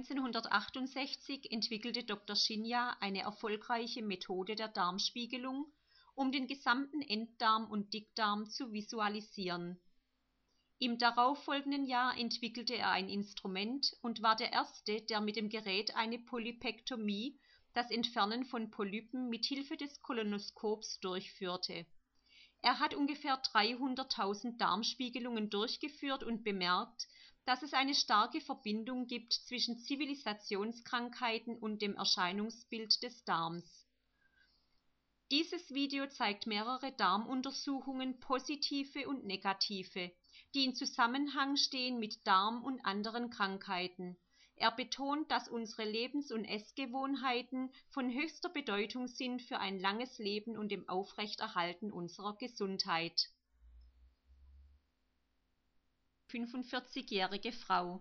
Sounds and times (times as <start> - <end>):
Speech: 0.0 - 9.8, 10.8 - 21.9, 22.6 - 33.8, 35.3 - 53.3, 56.3 - 58.0.